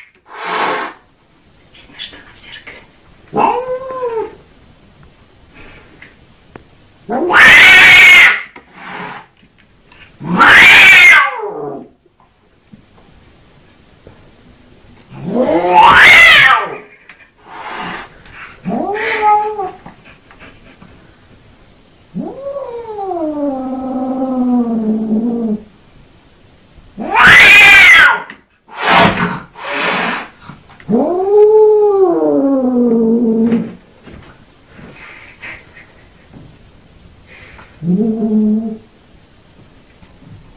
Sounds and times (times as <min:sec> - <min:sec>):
Caterwaul: 0:03.3 - 0:04.4, 0:07.1 - 0:09.2, 0:10.2 - 0:11.9, 0:15.1 - 0:17.0, 0:18.6 - 0:19.8, 0:22.1 - 0:25.7, 0:27.0 - 0:28.4, 0:30.9 - 0:33.8.